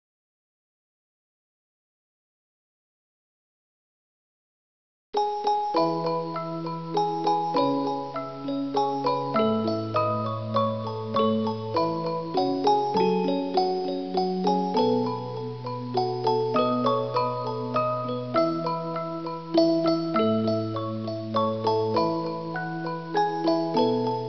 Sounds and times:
Glockenspiel: 5.2s - 24.2s
Marimba, xylophone: 5.2s - 24.2s.

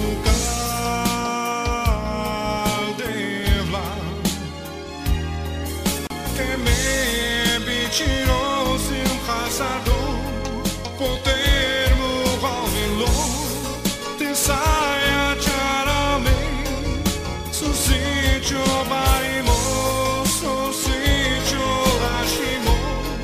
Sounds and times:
Gospel music: 0.0s - 23.2s.

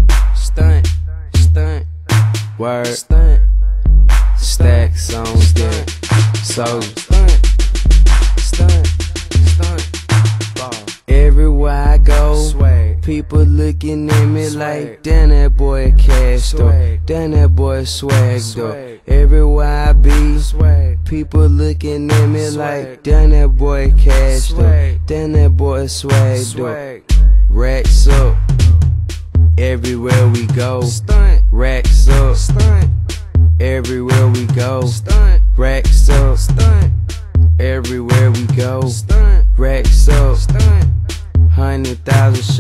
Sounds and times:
Music: 0.0s - 42.6s.

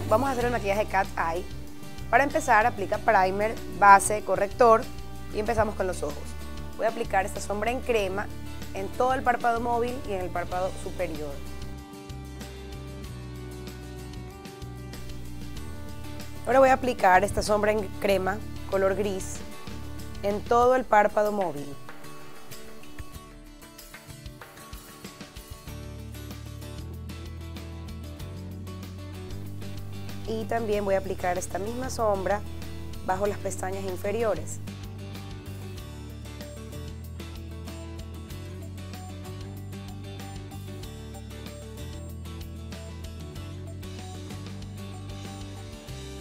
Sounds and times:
Speech: 0.0s - 1.5s, 2.2s - 11.5s, 16.5s - 19.4s, 20.2s - 21.8s, 30.3s - 34.7s
Music: 0.0s - 46.2s.

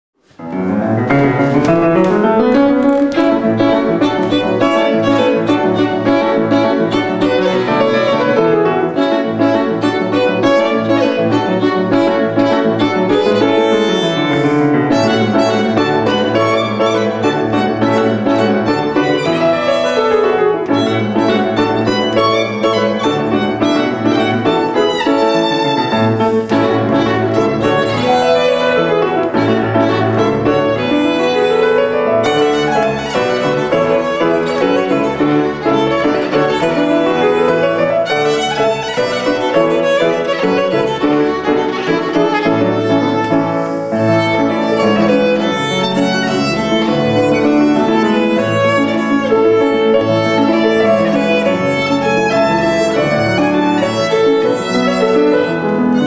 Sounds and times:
Violin, fiddle: 1.4s - 56.0s.

